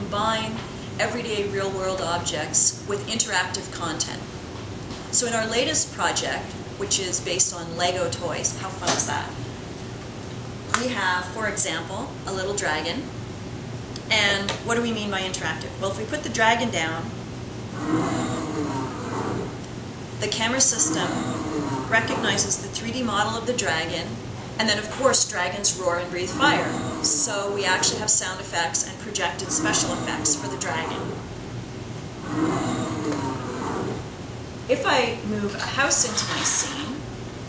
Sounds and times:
Speech: 0:10.8 - 0:13.1, 0:14.0 - 0:17.1, 0:20.2 - 0:31.2, 0:34.7 - 0:37.0.

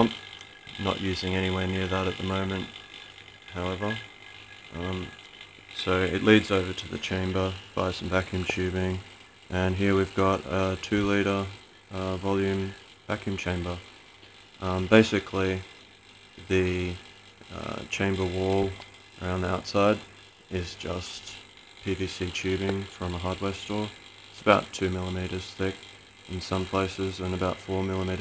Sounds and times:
Speech: 0:00.0 - 0:00.2, 0:00.8 - 0:02.7, 0:03.5 - 0:04.1, 0:04.7 - 0:05.2, 0:05.8 - 0:13.8, 0:14.6 - 0:15.7, 0:16.4 - 0:28.2.

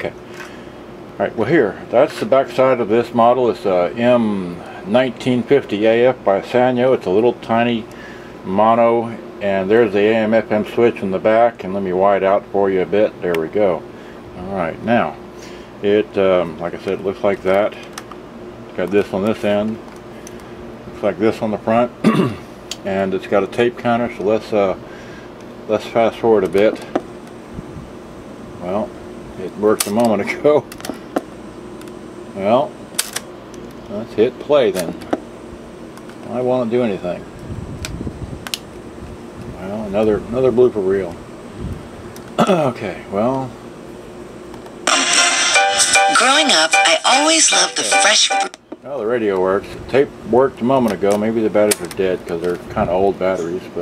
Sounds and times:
Speech: 0:01.2 - 0:07.9, 0:08.5 - 0:13.8, 0:14.4 - 0:15.2, 0:15.8 - 0:17.9, 0:18.8 - 0:19.8, 0:21.0 - 0:22.0, 0:22.8 - 0:24.8, 0:25.7 - 0:27.0, 0:28.6 - 0:30.7, 0:32.4 - 0:32.8, 0:33.9 - 0:35.1, 0:36.3 - 0:37.3, 0:39.6 - 0:41.2, 0:42.4 - 0:43.6, 0:46.2 - 0:53.8.

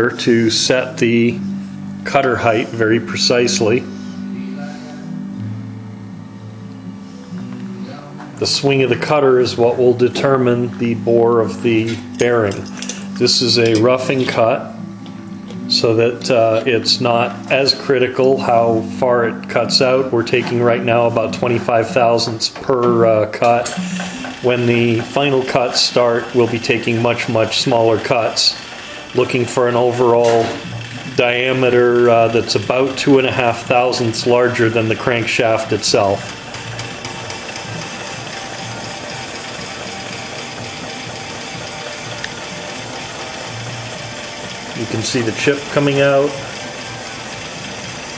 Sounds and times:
Speech: 0:00.0 - 0:01.4, 0:02.1 - 0:05.1, 0:07.9 - 0:14.7, 0:15.7 - 0:23.8, 0:24.5 - 0:28.6, 0:29.2 - 0:36.3, 0:44.8 - 0:46.4.

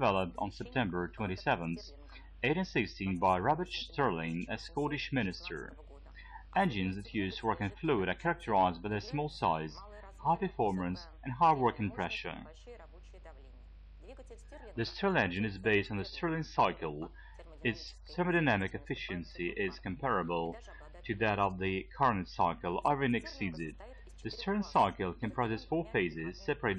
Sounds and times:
Speech: 0:00.0 - 0:12.8, 0:14.4 - 0:26.7.

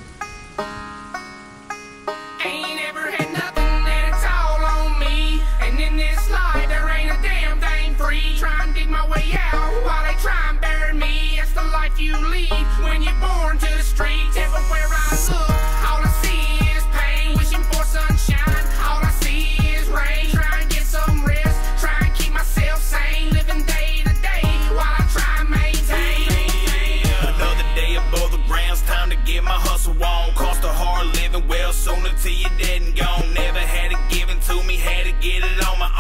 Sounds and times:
Music: 0:00.0 - 0:36.0.

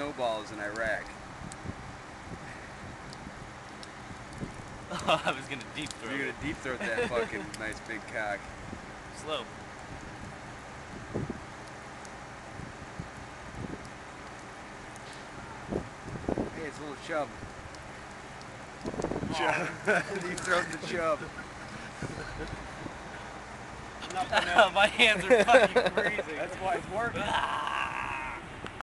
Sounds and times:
Speech: 0:05.1 - 0:08.4, 0:16.6 - 0:17.3, 0:19.3 - 0:21.3, 0:24.0 - 0:27.5.

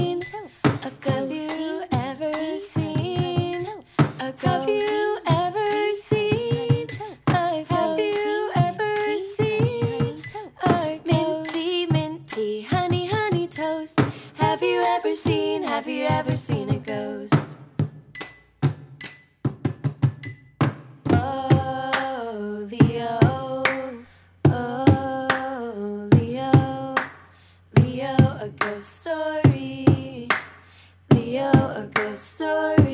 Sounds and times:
Music: 0:00.0 - 0:32.9.

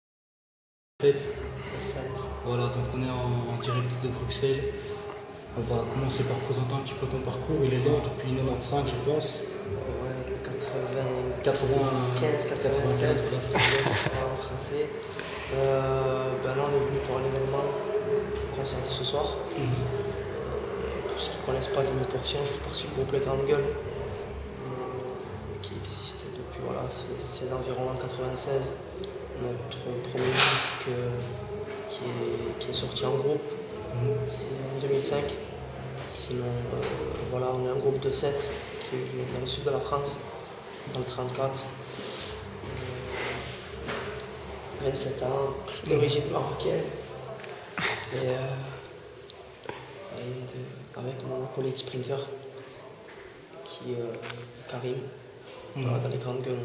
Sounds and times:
Speech: 0:01.0 - 0:23.9, 0:24.5 - 0:43.4, 0:44.2 - 0:56.6.

